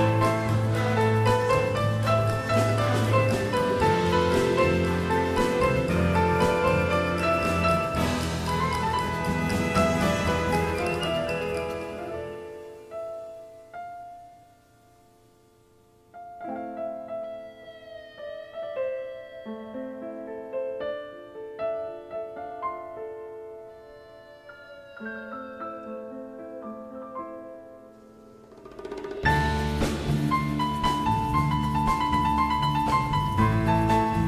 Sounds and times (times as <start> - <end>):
Piano: 0.0 - 34.2.